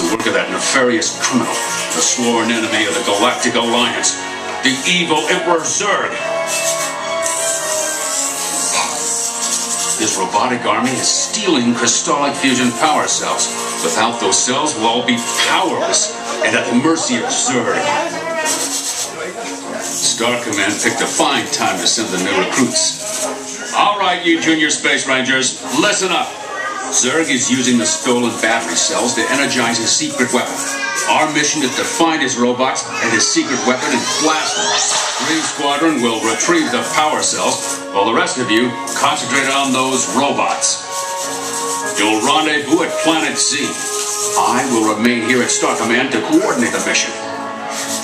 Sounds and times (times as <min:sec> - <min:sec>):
Speech: 0:00.0 - 0:06.2, 0:10.0 - 0:40.8, 0:42.0 - 0:47.2
Music: 0:00.0 - 0:48.0.